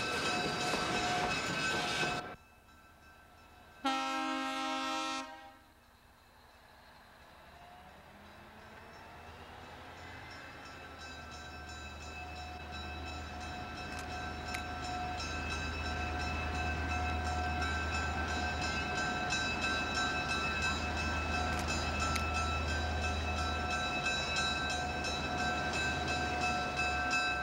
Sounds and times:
Railroad car, train wagon: 0.0s - 27.4s
Train horn: 3.8s - 5.7s.

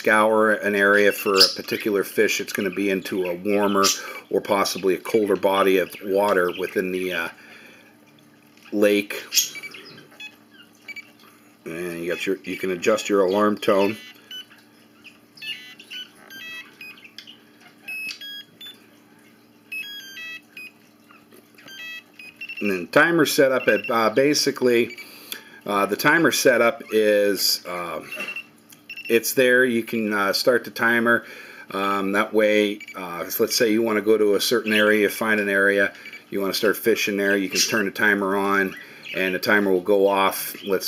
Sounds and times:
Speech: 0.0s - 7.4s, 8.7s - 9.4s, 11.7s - 14.0s, 22.6s - 24.9s, 25.7s - 28.1s, 29.1s - 40.8s.

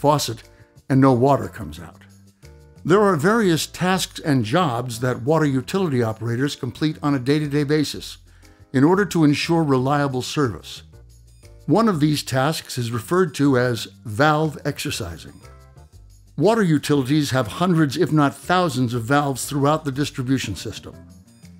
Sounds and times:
Speech: 0.0s - 2.1s, 2.8s - 8.2s, 8.8s - 10.8s, 11.7s - 15.4s, 16.4s - 21.0s
Music: 0.0s - 21.5s.

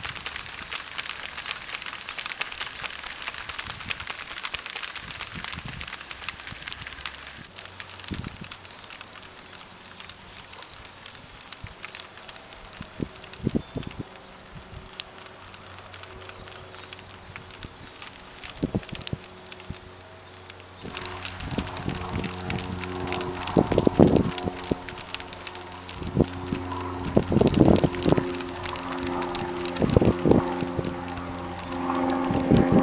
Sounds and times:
Wind: 0.0s - 32.8s.

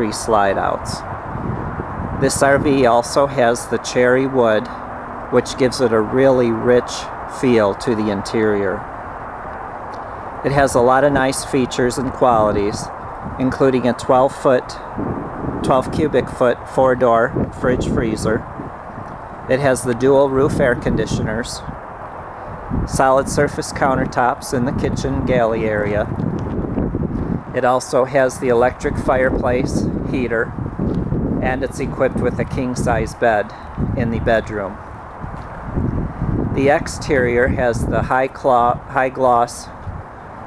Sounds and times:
Speech: 0.0s - 1.1s, 2.2s - 8.9s, 10.4s - 14.9s, 15.6s - 18.5s, 19.5s - 21.7s, 22.9s - 26.1s, 27.5s - 30.6s, 31.4s - 34.8s, 36.5s - 39.8s.

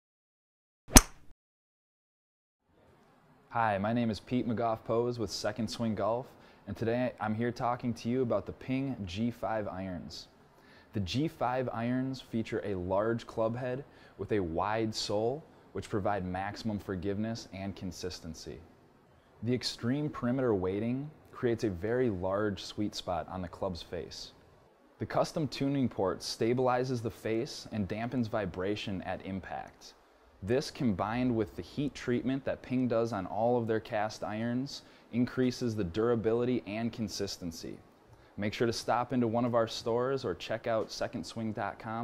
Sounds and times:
Speech: 2.8s - 10.3s, 10.9s - 18.7s, 19.4s - 24.4s, 25.0s - 42.0s.

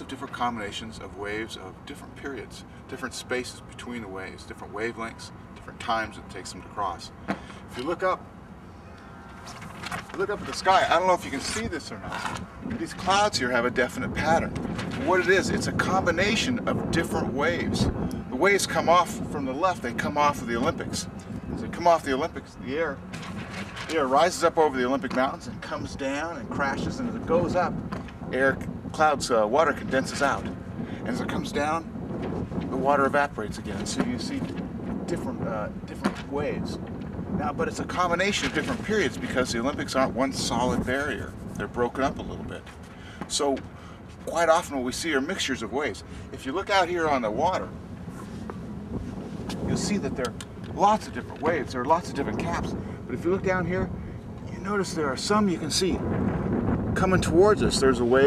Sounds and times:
Speech: 0.0s - 8.2s, 10.1s - 23.0s, 23.8s - 31.9s, 32.7s - 34.5s, 35.1s - 36.8s, 37.4s - 42.7s, 43.3s - 43.6s, 44.3s - 47.7s, 49.5s - 53.9s, 54.5s - 56.0s, 57.0s - 58.2s.

